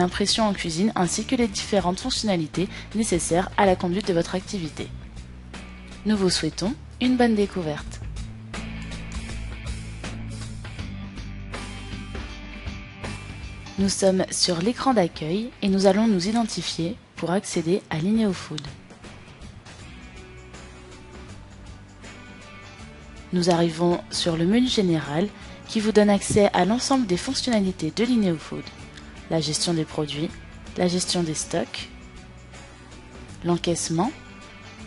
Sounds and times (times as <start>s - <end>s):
Speech: 0.0s - 4.9s, 6.0s - 8.0s, 13.8s - 18.8s, 23.3s - 28.7s, 29.3s - 31.9s, 33.4s - 34.2s
Music: 0.0s - 34.8s.